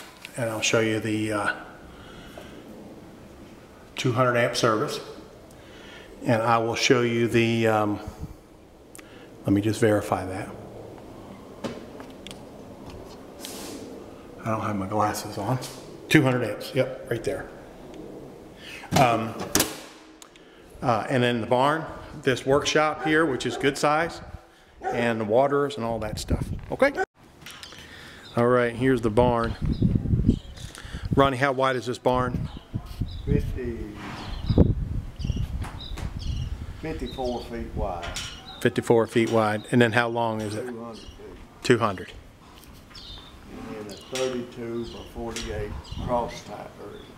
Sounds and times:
Speech: 0.3s - 1.7s, 4.0s - 5.2s, 6.2s - 8.1s, 9.4s - 10.6s, 14.4s - 17.6s, 18.9s - 19.5s, 20.8s - 27.0s, 28.4s - 29.6s, 31.2s - 32.6s, 33.3s - 34.0s, 36.8s - 42.2s, 43.5s - 47.1s.

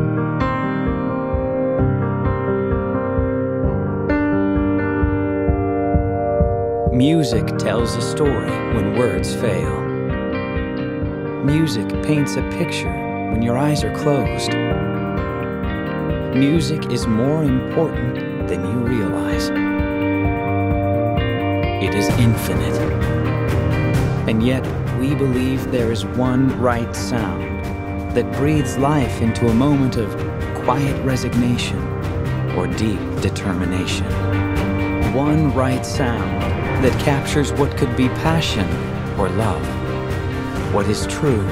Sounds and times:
Tender music: 0.0s - 41.5s
Speech: 6.9s - 9.9s, 11.4s - 14.6s, 16.4s - 19.5s, 21.8s - 23.0s, 24.3s - 27.5s, 28.2s - 31.9s, 32.5s - 34.2s, 35.1s - 39.8s, 40.7s - 41.5s.

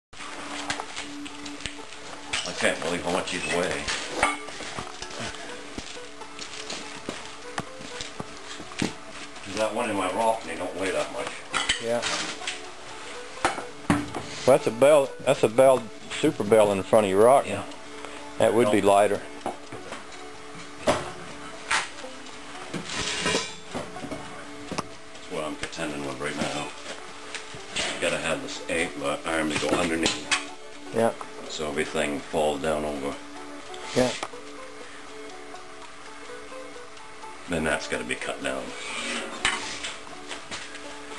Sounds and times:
Music: 0.2s - 41.1s.

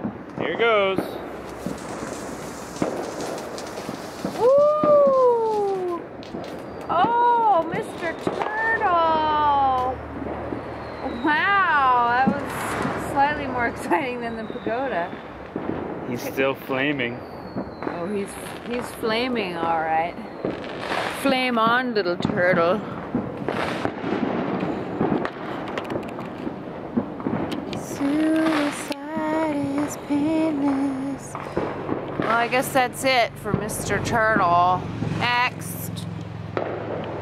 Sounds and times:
Firecracker: 0.0s - 37.2s
Outside, urban or manmade: 0.0s - 37.2s
Speech: 16.1s - 17.2s.

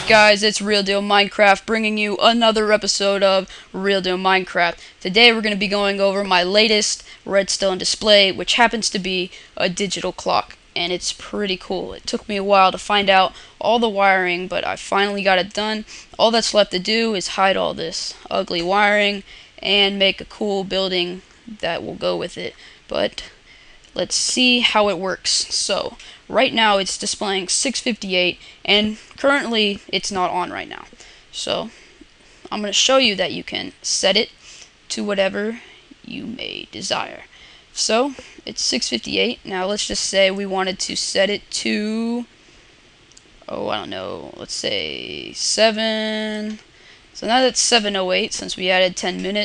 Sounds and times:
Speech: 0.0s - 23.4s, 24.0s - 31.8s, 32.5s - 34.3s, 34.9s - 42.3s, 43.4s - 46.6s, 47.2s - 49.4s.

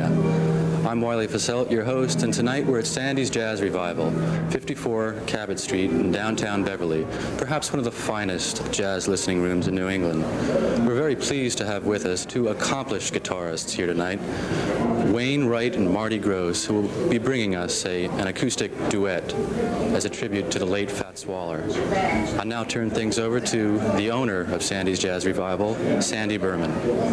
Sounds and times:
Speech: 0.9s - 14.3s, 15.0s - 27.1s.

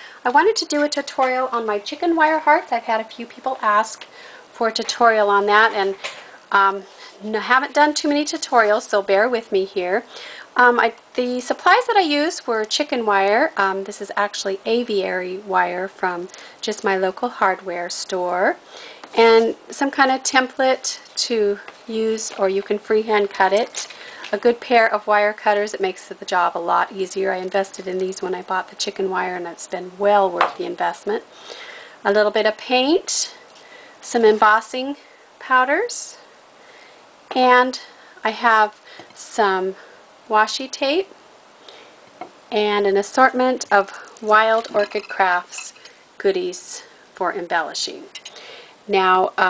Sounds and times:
Speech: 0.2s - 18.6s, 19.2s - 31.3s, 32.0s - 33.4s, 34.0s - 36.3s, 37.3s - 41.1s, 42.5s - 48.3s, 48.9s - 49.5s.

